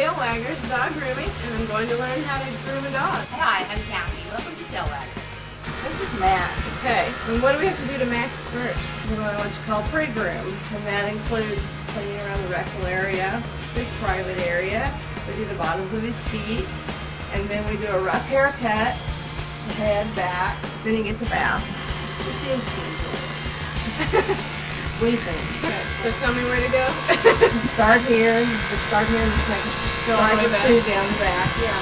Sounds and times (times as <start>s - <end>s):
Music: 0.0s - 31.8s.